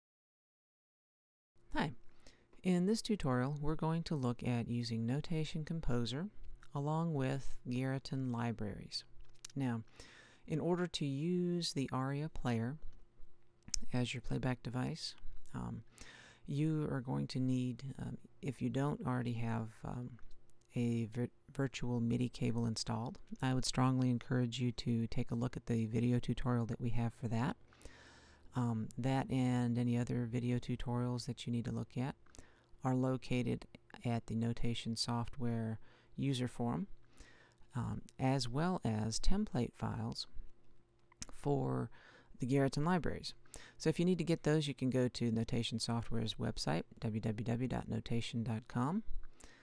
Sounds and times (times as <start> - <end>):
Speech: 1.7 - 2.0, 2.6 - 9.9, 10.5 - 12.9, 13.8 - 15.9, 16.5 - 27.6, 28.5 - 32.2, 32.8 - 36.9, 37.7 - 40.4, 41.2 - 49.1.